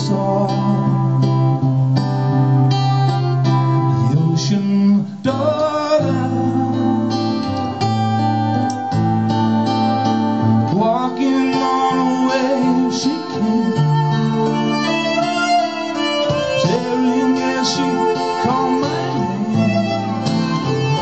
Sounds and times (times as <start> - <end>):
Blues: 0.0 - 21.0
Violin, fiddle: 7.2 - 21.0.